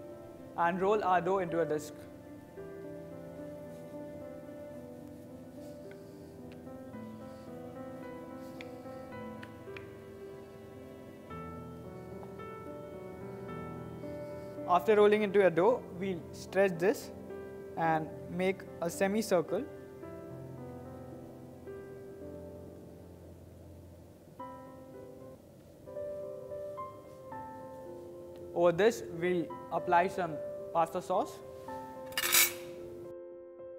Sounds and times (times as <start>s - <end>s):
Piano: 0.0s - 33.7s.